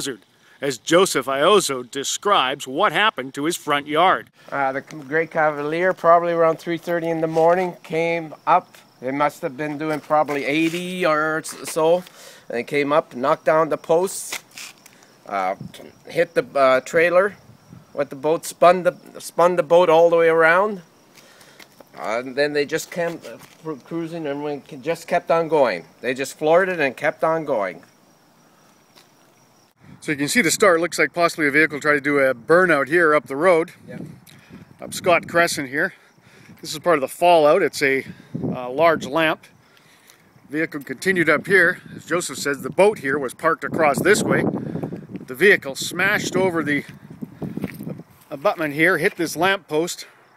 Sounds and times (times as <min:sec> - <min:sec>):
Speech: 0:00.0 - 0:14.4, 0:15.3 - 0:17.4, 0:18.0 - 0:20.8, 0:22.0 - 0:27.8, 0:30.0 - 0:34.1, 0:34.8 - 0:36.0, 0:36.6 - 0:39.4, 0:40.5 - 0:44.4, 0:45.3 - 0:46.9, 0:48.3 - 0:50.1.